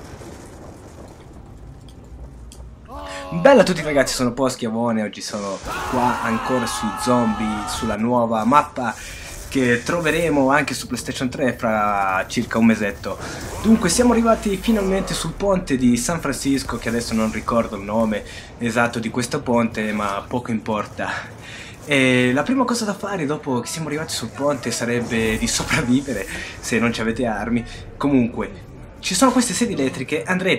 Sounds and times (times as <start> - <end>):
Speech: 2.9 - 30.5.